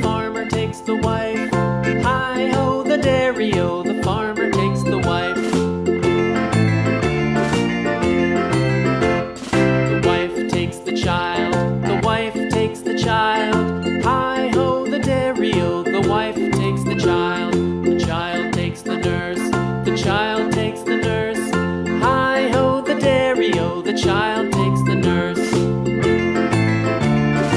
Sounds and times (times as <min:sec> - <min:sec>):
Music: 0:00.0 - 0:27.5.